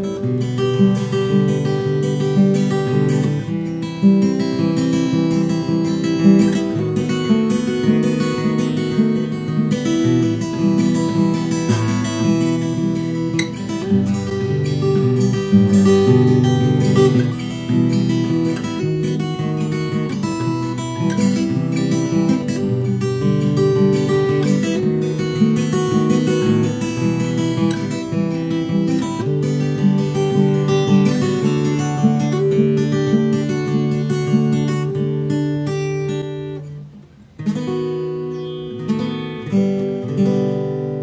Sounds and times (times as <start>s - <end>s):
Acoustic guitar: 0.0s - 41.0s.